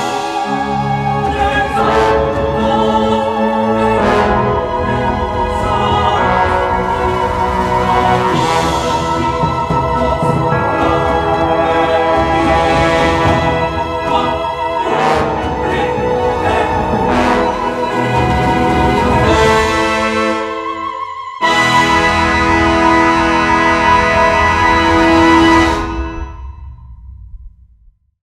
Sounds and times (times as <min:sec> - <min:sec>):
Music: 0:00.0 - 0:28.2.